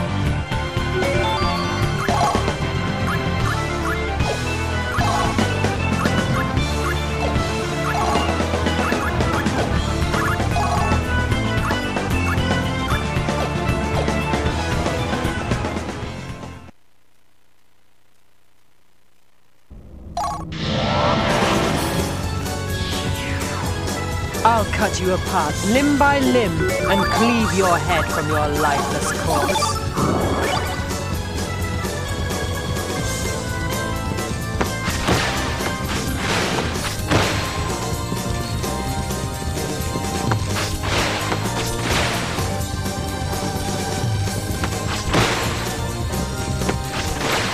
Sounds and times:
Music: 0.0 - 16.7, 20.2 - 47.5.

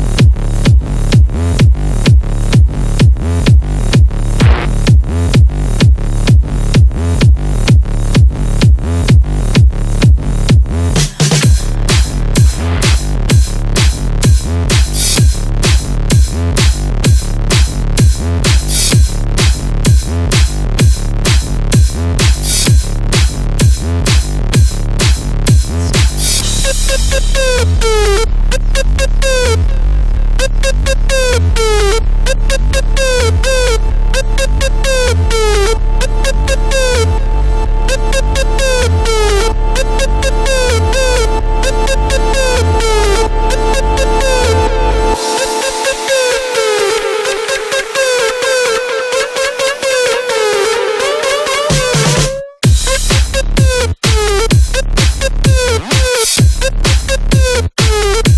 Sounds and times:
Music: 0.0 - 58.3.

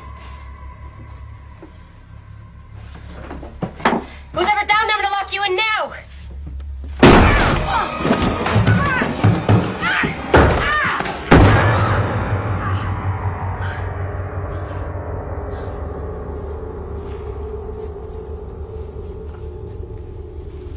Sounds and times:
Music: 0.0 - 20.7
Speech: 4.4 - 6.1
Slam: 7.0 - 7.8, 11.3 - 12.2.

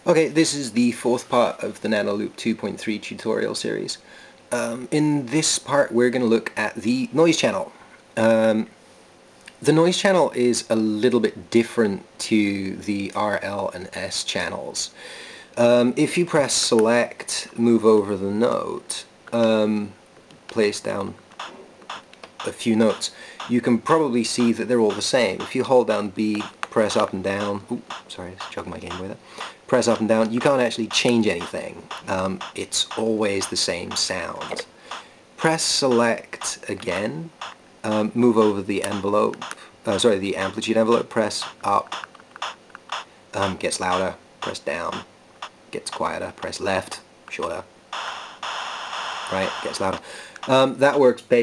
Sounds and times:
Speech: 0.0 - 8.7, 9.6 - 15.0, 15.6 - 21.2, 22.4 - 34.7, 35.4 - 41.9, 43.4 - 45.1, 45.7 - 47.7, 49.3 - 51.4.

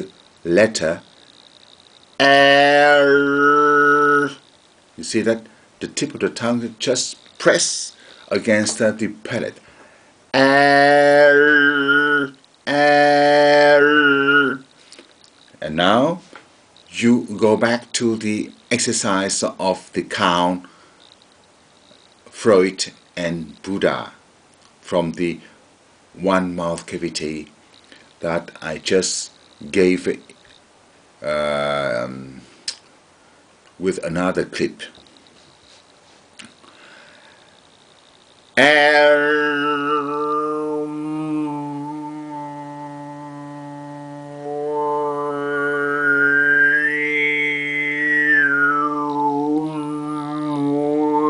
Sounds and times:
Male singing: 2.2 - 4.4, 10.4 - 14.6, 38.6 - 51.2
Speech: 5.0 - 9.6, 17.0 - 20.7, 22.3 - 24.2, 24.8 - 25.6, 26.2 - 27.6, 28.2 - 30.3, 31.2 - 32.4, 33.8 - 35.0.

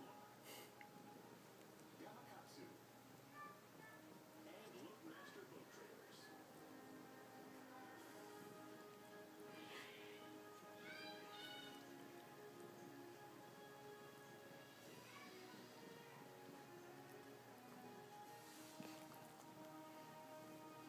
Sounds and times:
Music: 0.0 - 20.8
Speech: 4.4 - 6.3.

